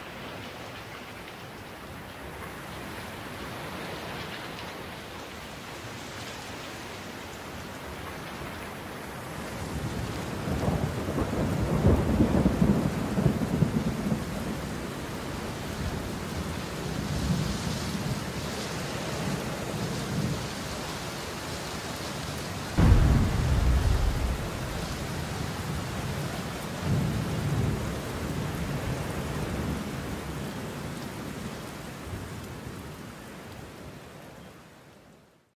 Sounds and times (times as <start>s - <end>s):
Rustling leaves: 15.6s - 27.5s.